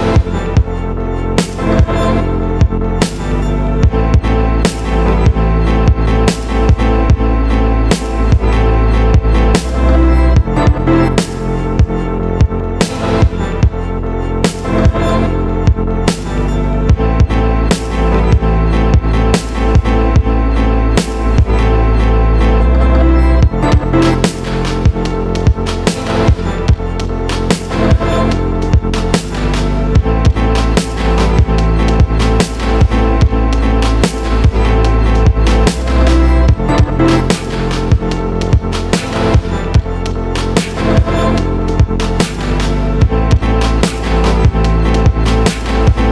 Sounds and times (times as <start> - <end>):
Music: 0.0 - 46.1.